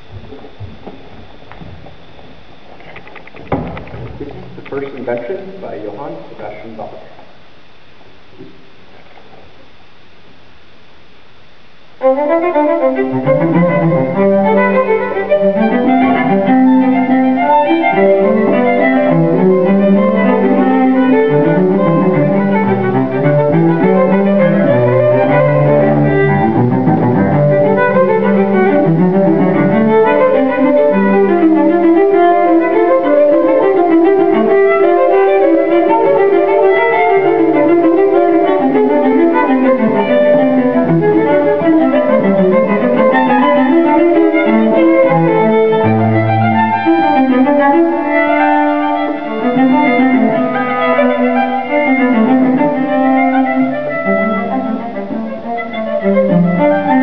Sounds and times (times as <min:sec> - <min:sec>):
Cello: 0:00.0 - 0:57.0
Violin, fiddle: 0:12.0 - 0:57.0.